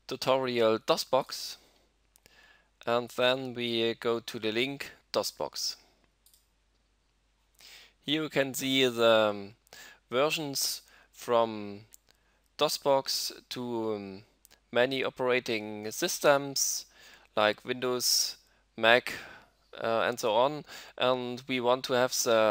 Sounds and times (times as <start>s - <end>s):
Speech: 0.1s - 1.6s, 2.8s - 5.8s, 8.1s - 11.9s, 12.6s - 19.2s, 19.8s - 22.5s.